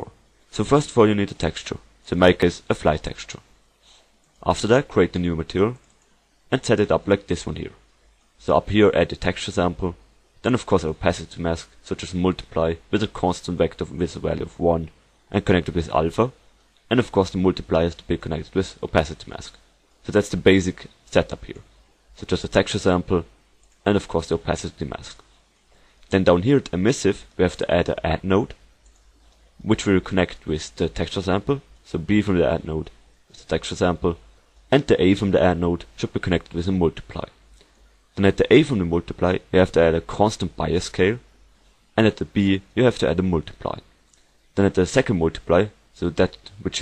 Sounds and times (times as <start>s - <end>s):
Speech: 0.0s - 3.5s, 4.4s - 5.8s, 6.5s - 7.8s, 8.4s - 25.3s, 26.1s - 28.6s, 29.6s - 37.4s, 38.2s - 41.3s, 42.0s - 43.9s, 44.6s - 46.8s.